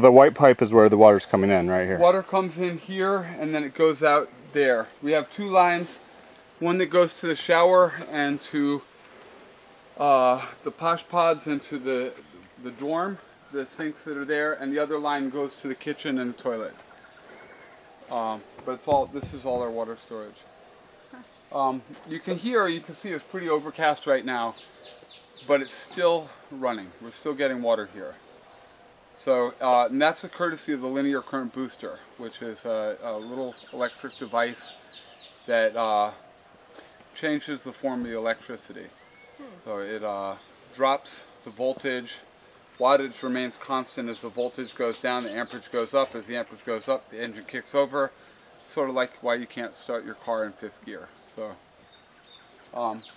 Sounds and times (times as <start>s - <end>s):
Speech: 0.0s - 6.0s, 6.6s - 8.8s, 10.0s - 16.8s, 18.1s - 20.4s, 21.5s - 24.6s, 25.5s - 28.2s, 29.2s - 34.8s, 35.5s - 36.2s, 37.2s - 51.6s, 52.7s - 53.1s.